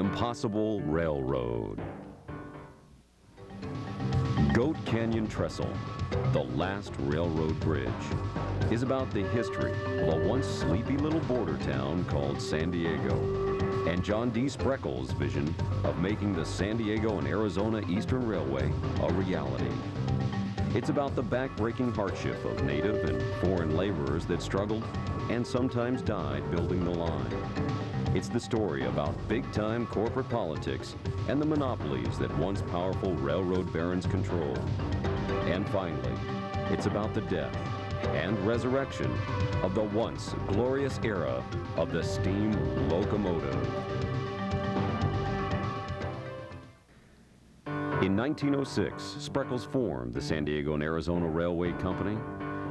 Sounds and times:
Speech: 0.0 - 1.9, 4.4 - 13.3, 13.9 - 19.8, 20.7 - 27.4, 28.1 - 34.7, 35.5 - 43.7, 48.0 - 52.3
Music: 0.0 - 52.7.

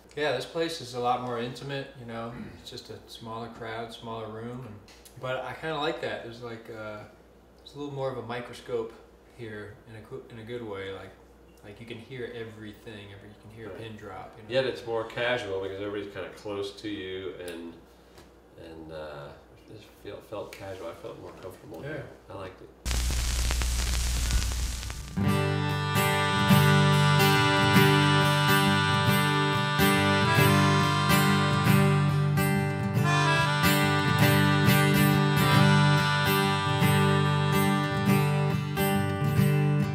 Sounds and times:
Speech: 0.1 - 17.8, 18.6 - 22.8.

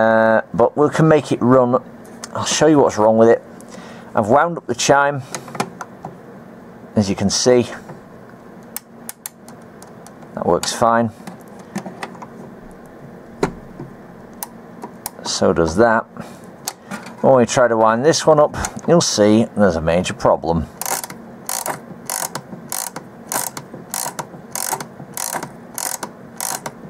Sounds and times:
Speech: 0.0 - 3.5, 4.2 - 5.3, 7.0 - 7.9, 10.4 - 11.2, 15.2 - 16.1, 17.2 - 20.8.

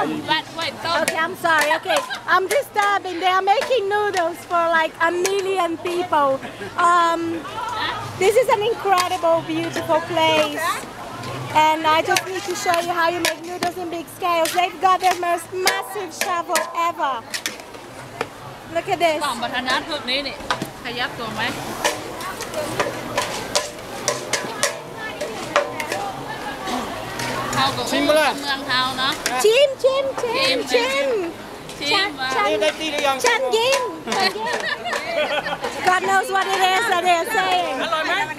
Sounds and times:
Sizzle: 20.8 - 29.7
Stir: 21.6 - 26.2.

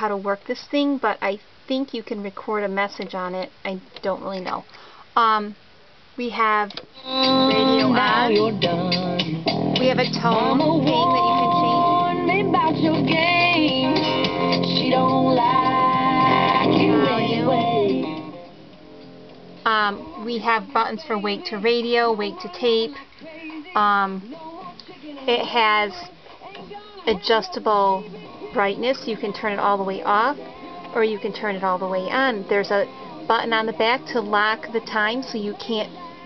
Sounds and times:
Speech: 0.0 - 5.6, 6.2 - 6.8, 19.7 - 23.0, 23.8 - 24.3, 25.3 - 26.1, 27.1 - 30.4, 31.0 - 35.9
Music: 7.0 - 36.2.

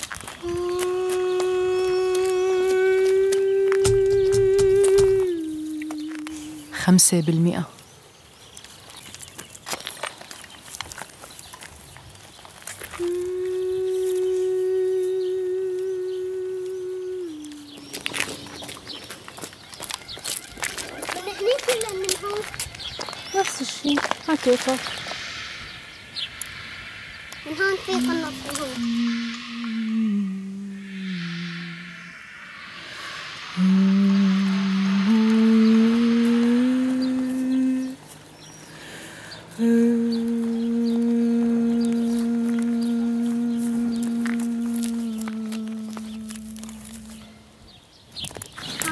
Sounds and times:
Speech: 6.7 - 7.8, 21.0 - 22.5, 23.3 - 24.8, 27.5 - 28.8.

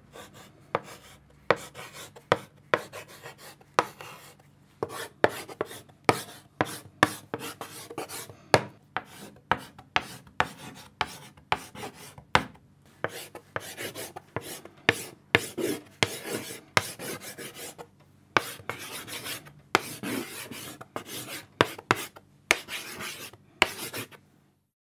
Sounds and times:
Writing: 0.1 - 24.2.

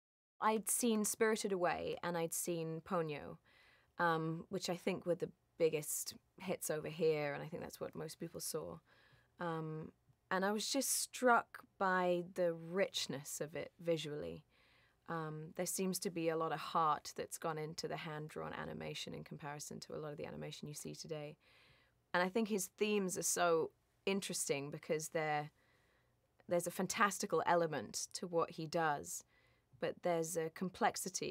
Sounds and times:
Speech: 0.4 - 3.4, 4.0 - 8.8, 9.4 - 14.4, 15.1 - 21.4, 22.2 - 25.5, 26.5 - 29.2, 29.8 - 31.3.

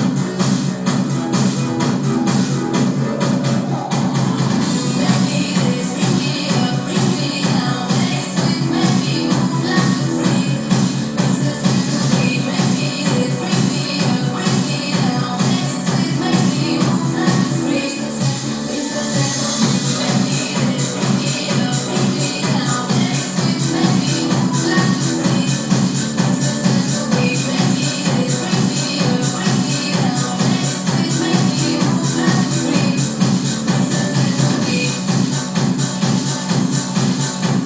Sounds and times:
Disco: 0.0 - 37.6.

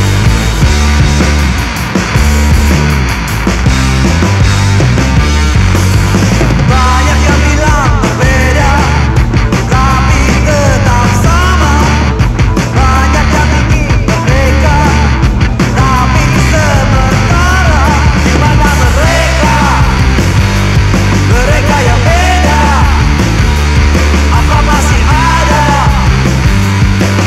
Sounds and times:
Rhythm and blues: 0.0 - 27.2.

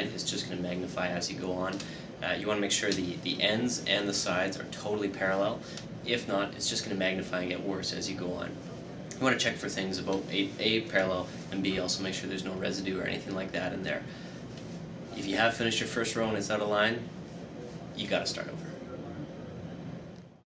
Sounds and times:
Speech: 0.0 - 14.1, 15.1 - 19.8.

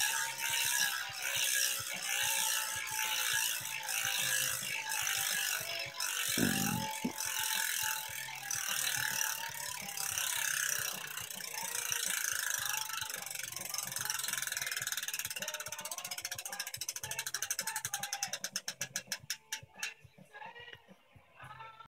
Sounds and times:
Music: 0.0 - 21.9.

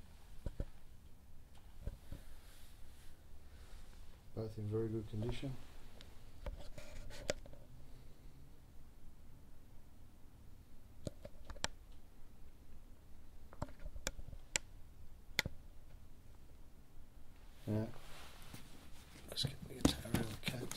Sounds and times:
Speech: 4.4 - 5.6, 17.7 - 18.0, 19.3 - 20.7.

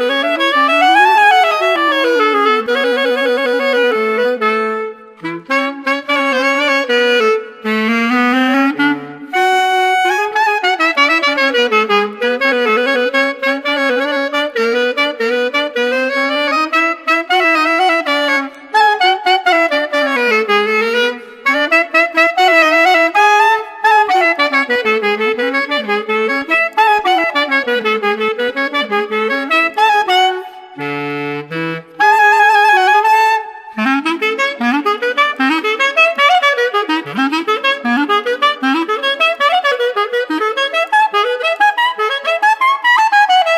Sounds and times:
Clarinet: 0.0 - 43.5.

